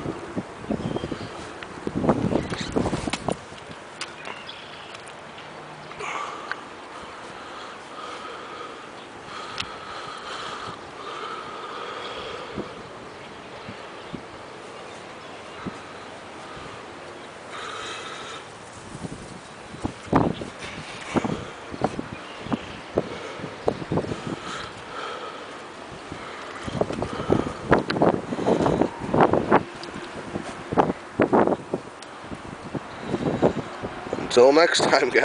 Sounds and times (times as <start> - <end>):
Outside, urban or manmade: 0.0 - 35.2.